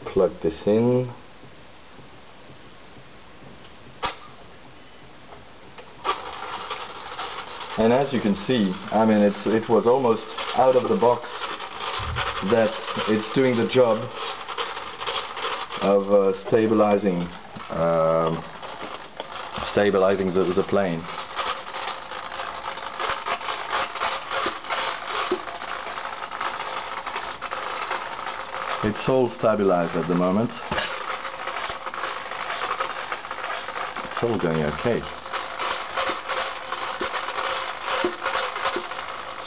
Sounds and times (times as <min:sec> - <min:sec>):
Speech: 0:00.0 - 0:01.2, 0:07.8 - 0:11.5, 0:12.4 - 0:14.2, 0:15.8 - 0:18.4, 0:19.6 - 0:21.1, 0:28.8 - 0:30.7, 0:34.1 - 0:35.1.